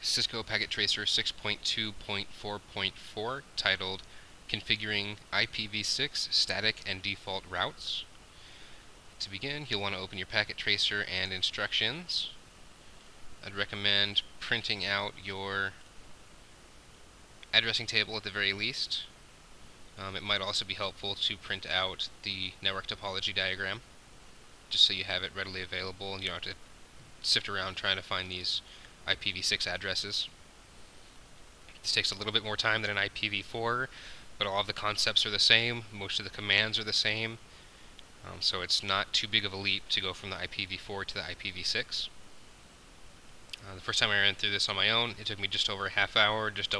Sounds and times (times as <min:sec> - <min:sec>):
Speech: 0:00.0 - 0:08.2, 0:09.2 - 0:12.4, 0:13.4 - 0:15.8, 0:17.4 - 0:19.2, 0:20.0 - 0:23.9, 0:24.7 - 0:26.6, 0:27.2 - 0:30.4, 0:31.7 - 0:37.4, 0:38.2 - 0:42.2, 0:43.6 - 0:46.8.